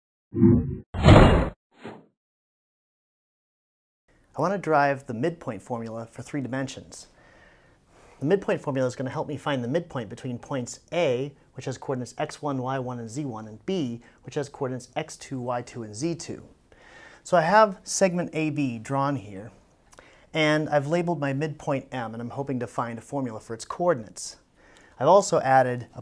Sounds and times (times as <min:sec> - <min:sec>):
Inside, small room: 0:04.1 - 0:26.0
Speech: 0:04.4 - 0:07.1, 0:08.2 - 0:16.6, 0:17.2 - 0:19.6, 0:20.3 - 0:24.4, 0:25.0 - 0:26.0.